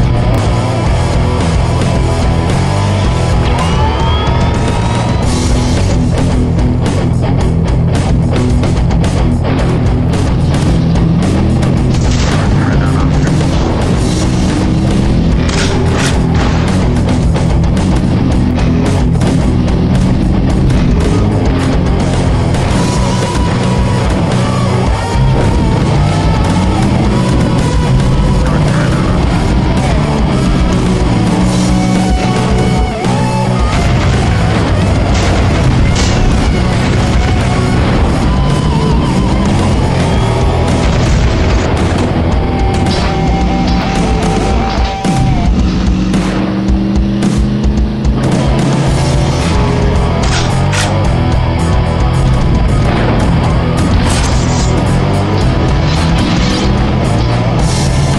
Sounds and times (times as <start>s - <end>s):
Music: 0.0s - 58.1s
Vehicle: 0.0s - 58.1s.